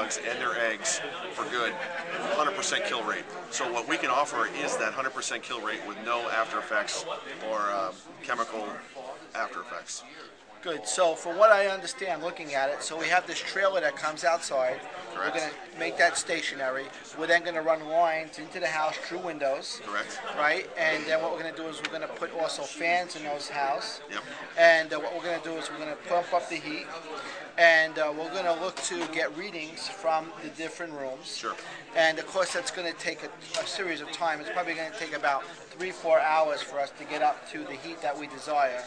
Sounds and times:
Speech: 0:00.0 - 0:38.8.

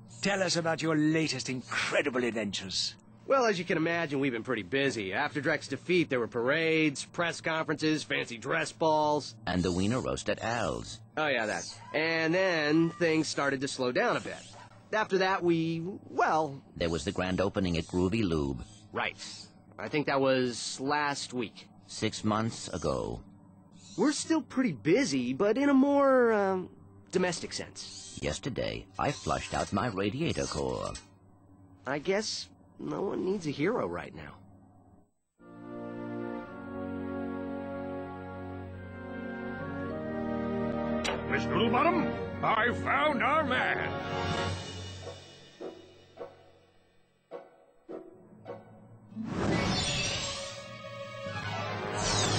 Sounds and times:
Speech: 0:15.0 - 0:23.2, 0:24.0 - 0:31.1, 0:31.9 - 0:34.4, 0:41.3 - 0:44.0.

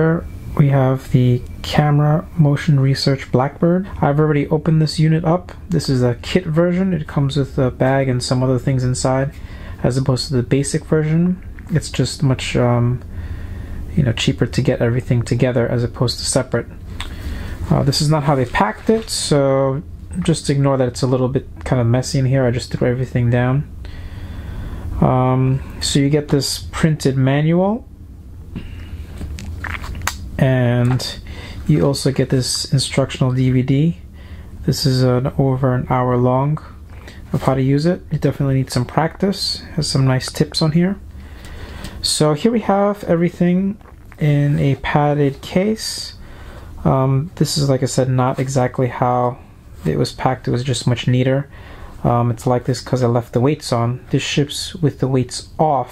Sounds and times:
Speech: 0:00.0 - 0:13.1, 0:13.9 - 0:16.8, 0:17.7 - 0:23.7, 0:25.0 - 0:27.9, 0:30.4 - 0:41.0, 0:42.0 - 0:46.2, 0:46.8 - 0:55.9.

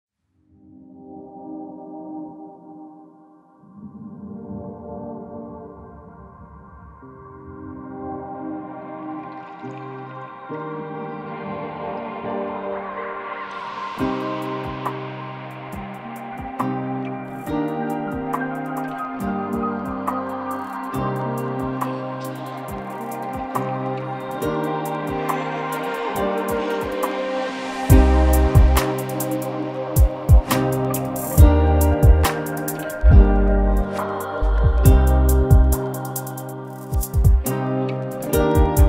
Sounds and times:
Ambient music: 0:00.6 - 0:38.8.

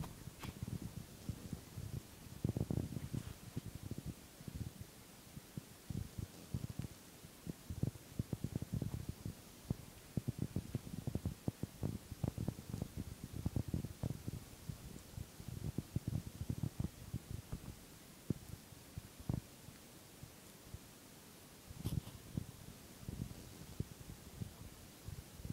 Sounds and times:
Fire: 0:00.0 - 0:25.5.

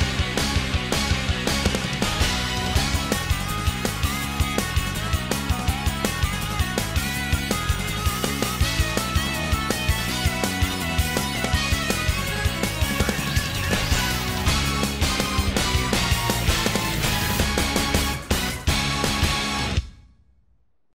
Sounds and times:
Soundtrack music: 0:00.0 - 0:20.1.

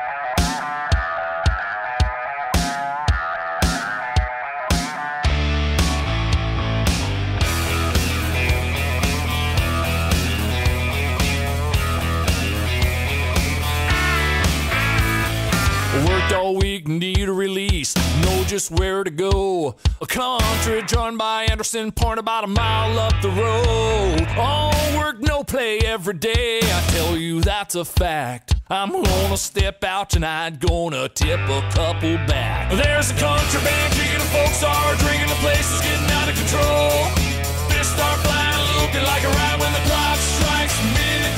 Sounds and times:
Music: 0:00.0 - 0:41.3.

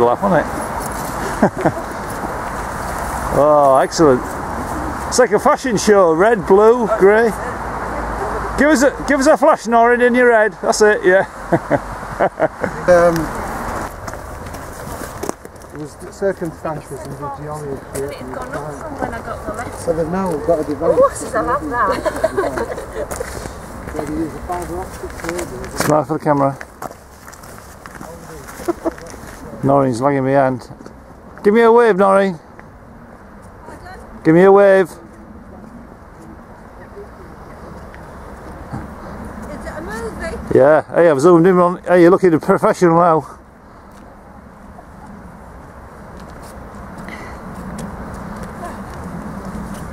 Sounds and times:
Walk, footsteps: 0:13.7 - 0:17.2, 0:23.1 - 0:29.5, 0:46.1 - 0:49.9.

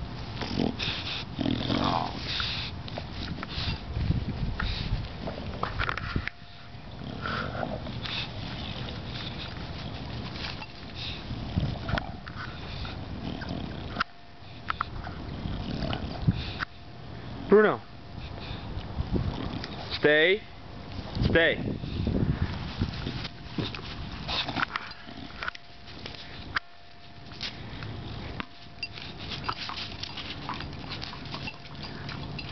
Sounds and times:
Chewing, mastication: 0:27.4 - 0:32.5.

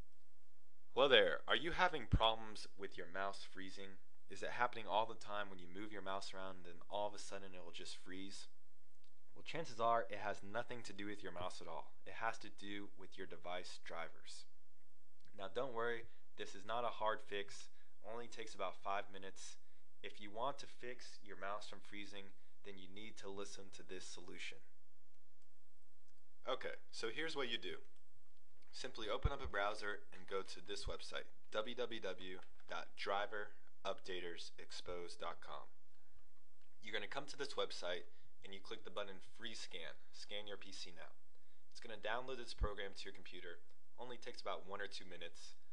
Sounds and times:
Speech: 0:01.0 - 0:08.5, 0:09.4 - 0:14.5, 0:15.4 - 0:24.7, 0:26.5 - 0:27.8, 0:28.7 - 0:35.8, 0:36.8 - 0:41.2, 0:41.8 - 0:45.6.

